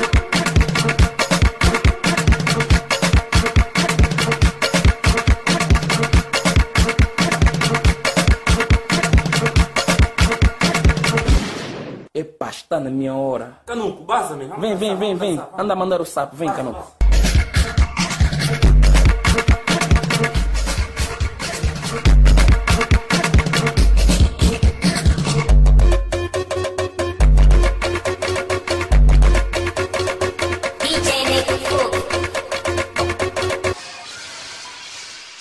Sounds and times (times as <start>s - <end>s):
Music of Africa: 0.0s - 11.2s, 17.0s - 33.8s
Speech: 12.2s - 17.0s.